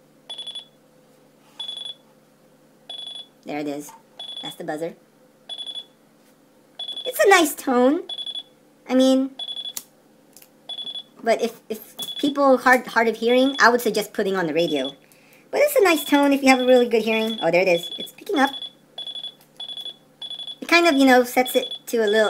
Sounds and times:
Alarm: 0.3s - 0.8s, 1.6s - 2.0s, 2.9s - 3.3s, 4.2s - 4.6s, 5.5s - 6.0s, 6.8s - 7.2s, 8.1s - 8.5s, 9.4s - 9.8s, 10.7s - 11.1s, 12.0s - 12.4s, 13.4s - 13.7s, 14.6s - 15.0s, 16.5s - 20.7s, 21.6s - 22.3s
Speech: 3.5s - 5.0s, 7.1s - 8.1s, 8.9s - 9.4s, 11.2s - 15.0s, 15.6s - 18.6s, 20.6s - 22.3s.

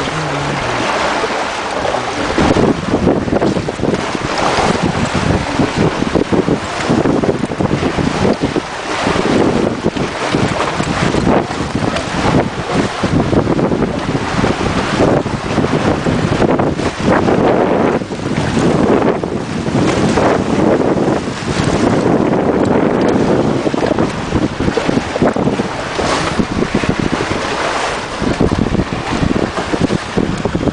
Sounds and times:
Sailboat, sailing ship: 0.0s - 30.7s
Wind noise (microphone): 0.0s - 30.7s.

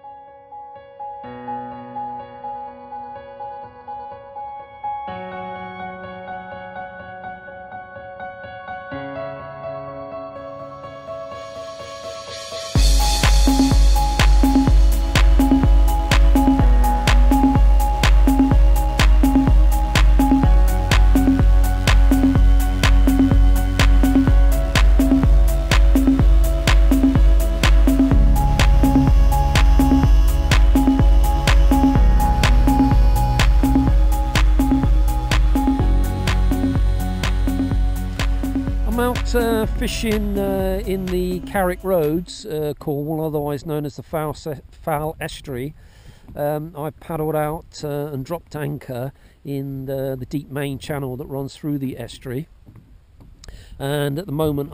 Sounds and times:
Music: 0.0s - 42.6s.

